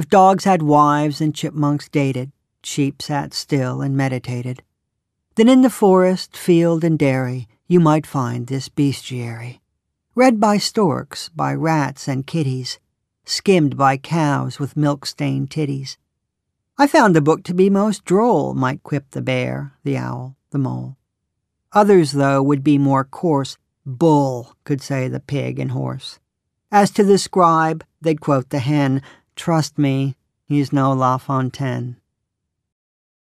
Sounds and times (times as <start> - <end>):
Speech: 0.0 - 4.6, 5.4 - 9.6, 10.2 - 16.0, 16.8 - 21.0, 21.8 - 32.0.